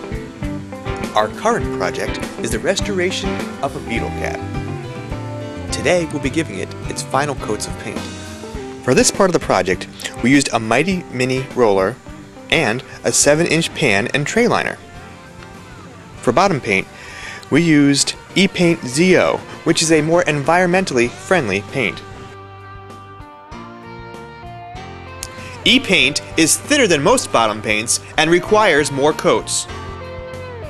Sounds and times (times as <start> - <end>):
Music: 0.0 - 30.6
Speech: 1.1 - 4.4, 5.7 - 8.1, 8.9 - 14.8, 16.2 - 16.9, 17.5 - 22.0, 25.6 - 29.7.